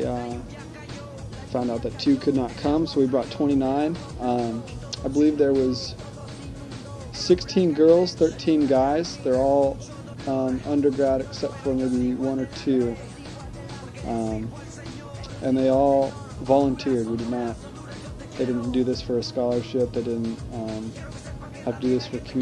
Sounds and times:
Speech: 0:00.0 - 0:00.5, 0:01.5 - 0:06.0, 0:07.2 - 0:13.0, 0:14.0 - 0:14.6, 0:15.3 - 0:17.7, 0:18.4 - 0:21.0, 0:21.6 - 0:22.4
Music: 0:00.0 - 0:22.4.

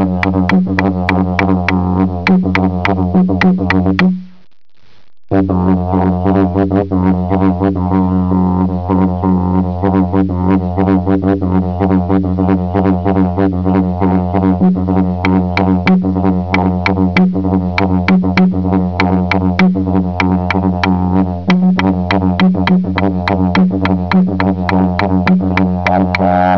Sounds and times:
Music: 0:00.0 - 0:04.4, 0:05.4 - 0:26.5.

